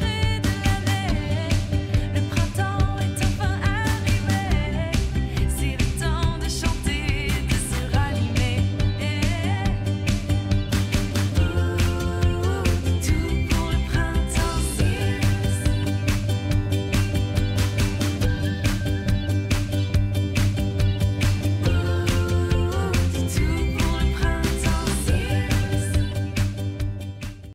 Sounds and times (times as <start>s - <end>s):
Music: 0.0s - 27.5s.